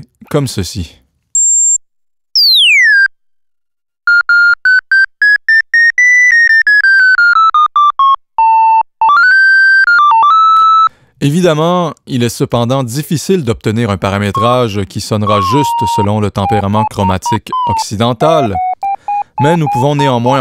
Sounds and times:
Speech: 0.0 - 1.1, 11.2 - 18.6, 19.4 - 20.4.

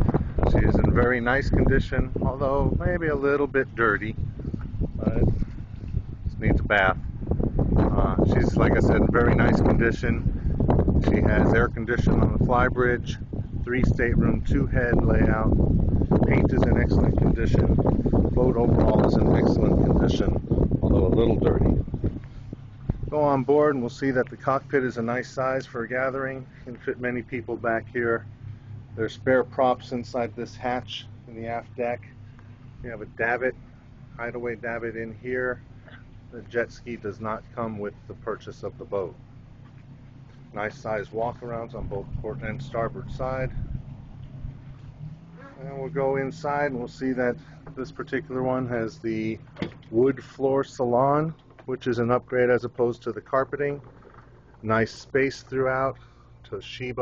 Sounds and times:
Boat, Water vehicle: 0.0 - 57.0
Speech: 0.4 - 4.2, 5.0 - 5.3, 6.3 - 7.0, 7.8 - 10.3, 11.0 - 15.6, 16.3 - 17.8, 18.4 - 21.8, 23.1 - 28.2, 29.0 - 32.1, 32.8 - 33.6, 34.2 - 39.2, 40.5 - 43.6, 45.4 - 53.9, 54.6 - 57.0.

